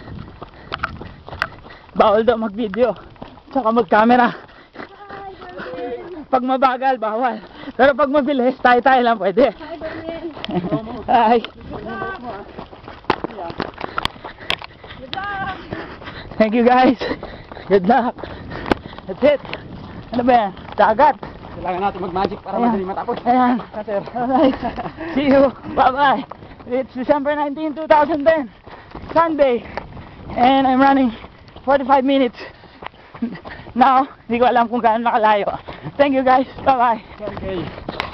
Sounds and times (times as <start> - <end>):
Outside, rural or natural: 0.0 - 38.1.